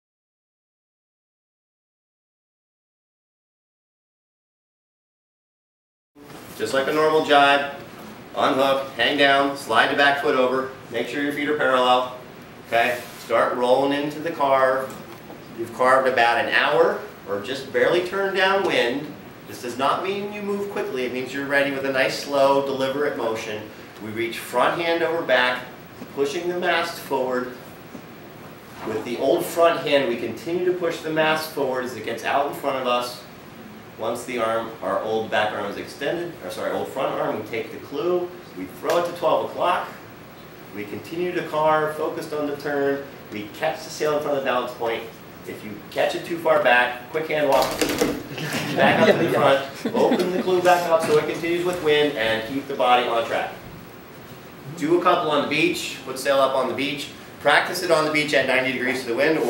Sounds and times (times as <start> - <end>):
Speech: 6.6 - 27.6, 28.8 - 33.3, 34.0 - 40.0, 40.7 - 48.0, 48.7 - 53.7, 54.6 - 59.4.